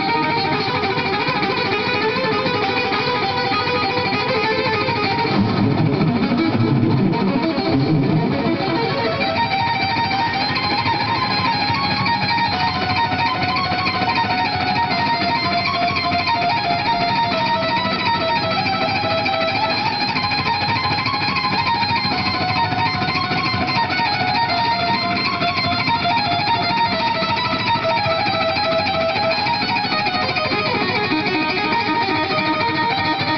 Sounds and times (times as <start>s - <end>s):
Electric guitar: 0.0s - 33.3s.